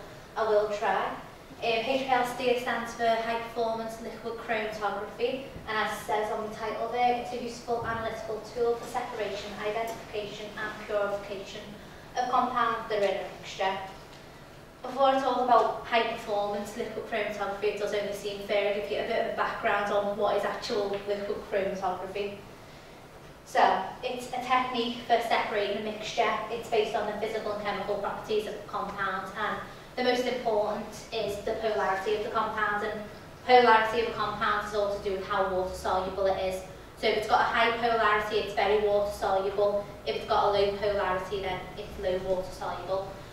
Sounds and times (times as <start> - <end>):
Speech: 0.0 - 14.0, 14.8 - 22.4, 23.5 - 43.2.